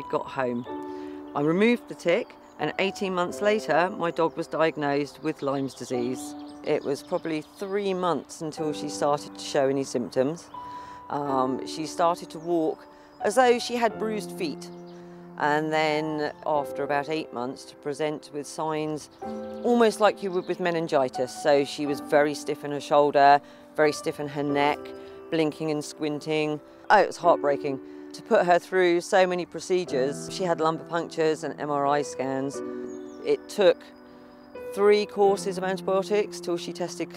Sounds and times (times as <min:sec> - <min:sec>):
Speech: 0:00.0 - 0:00.7, 0:01.4 - 0:10.5, 0:11.1 - 0:14.7, 0:15.4 - 0:32.6, 0:33.2 - 0:33.9, 0:34.7 - 0:37.1
Music: 0:00.0 - 0:37.1.